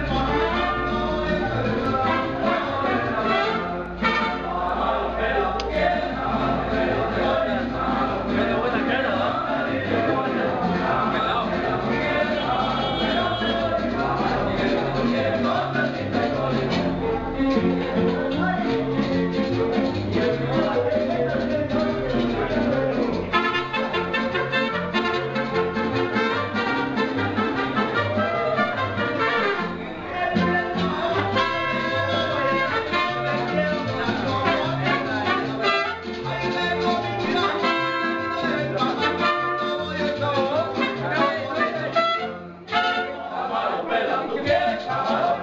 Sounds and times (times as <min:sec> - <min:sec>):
Speech: 0:00.0 - 0:24.2, 0:28.0 - 0:45.4
Music: 0:00.0 - 0:45.4.